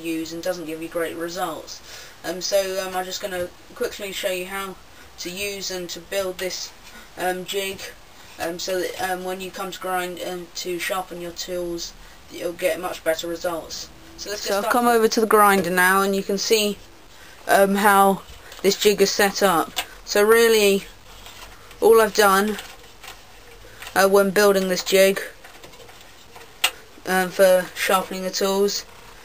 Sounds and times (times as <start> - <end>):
Speech: 0.0 - 16.8, 17.5 - 20.9, 21.8 - 22.6, 24.0 - 25.4, 27.0 - 28.9.